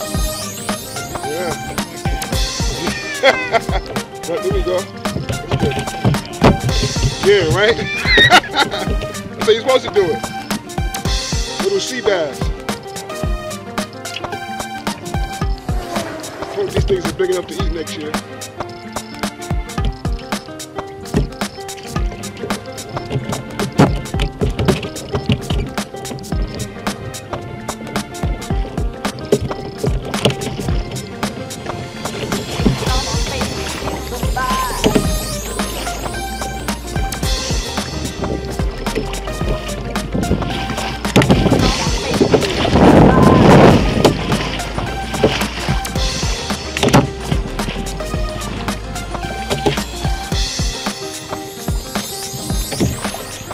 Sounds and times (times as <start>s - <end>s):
Music: 0.0s - 53.5s
Rowboat, canoe, kayak: 0.0s - 53.5s.